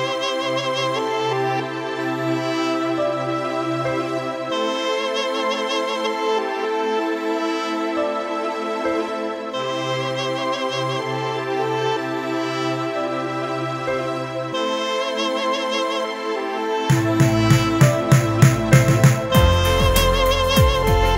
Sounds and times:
Electric piano: 0.0 - 21.1.

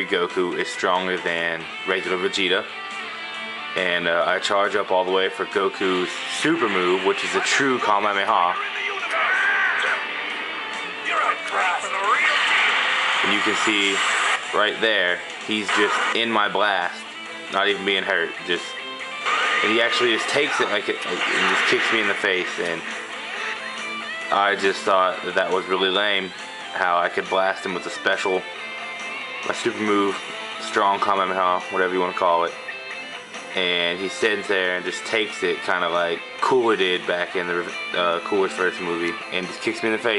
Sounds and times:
Speech: 0.0 - 2.7, 3.8 - 10.0, 11.0 - 12.5, 13.2 - 18.8, 19.6 - 22.9, 24.3 - 28.4, 29.5 - 32.5, 33.5 - 40.1
Music: 0.0 - 40.1.

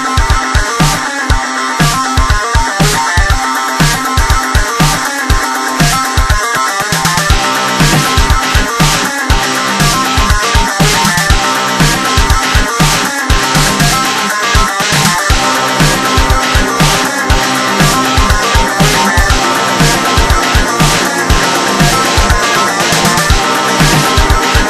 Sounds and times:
Techno: 0.0 - 24.7.

